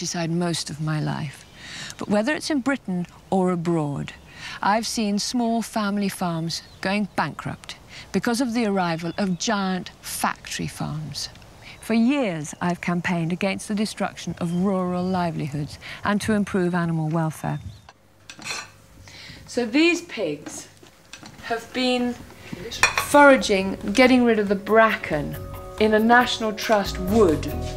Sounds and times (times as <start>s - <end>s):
Speech: 2.0s - 17.8s, 19.5s - 20.8s, 21.4s - 27.6s.